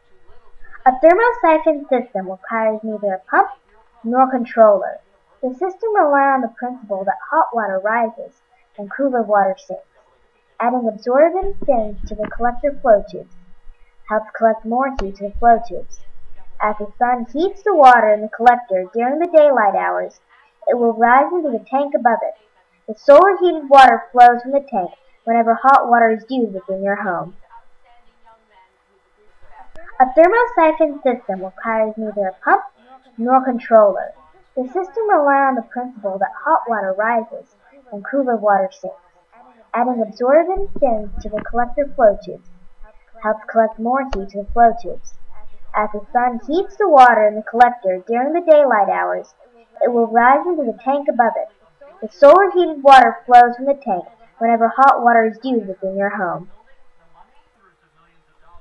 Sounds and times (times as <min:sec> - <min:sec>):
Speech: 0:00.0 - 0:09.8, 0:10.6 - 0:13.5, 0:14.1 - 0:58.6.